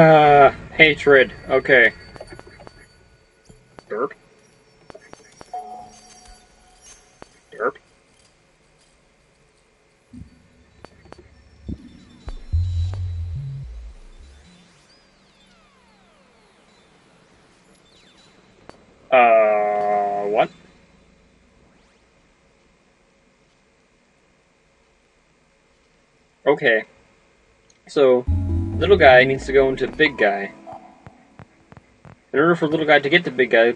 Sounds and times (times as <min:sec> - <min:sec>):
Speech: 0:00.0 - 0:02.0, 0:03.9 - 0:04.2, 0:07.6 - 0:07.8, 0:19.2 - 0:20.5, 0:26.5 - 0:26.9, 0:27.9 - 0:30.6, 0:32.4 - 0:33.7
Music: 0:10.2 - 0:14.8, 0:28.3 - 0:32.0.